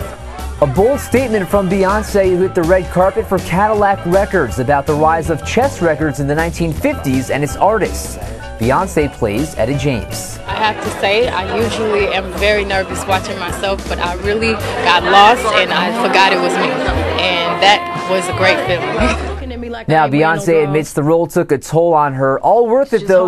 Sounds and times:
Music: 0.0 - 21.0.

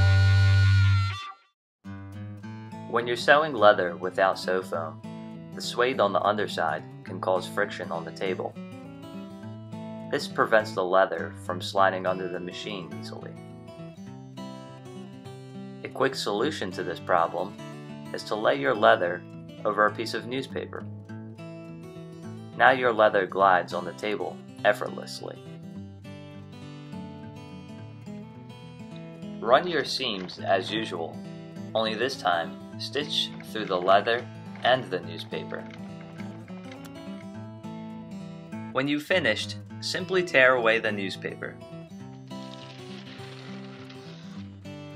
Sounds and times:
Music: 0.0 - 44.9
Speech: 2.9 - 5.0, 5.6 - 8.6, 10.1 - 13.4, 15.9 - 20.8, 22.6 - 25.4, 29.4 - 31.2, 31.8 - 35.7, 38.8 - 41.6.

